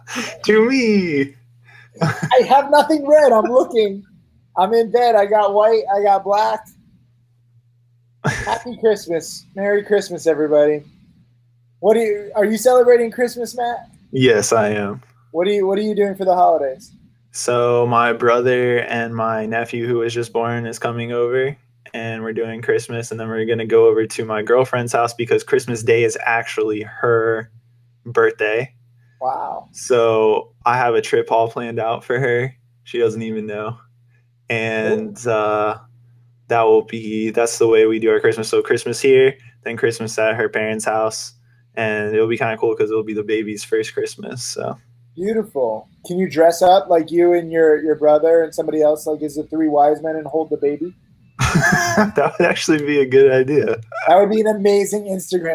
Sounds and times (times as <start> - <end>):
Speech: 0.0 - 4.0, 4.6 - 6.7, 8.3 - 10.9, 11.8 - 27.5, 28.1 - 33.8, 34.5 - 35.8, 36.5 - 55.5
Inside, small room: 0.0 - 55.5.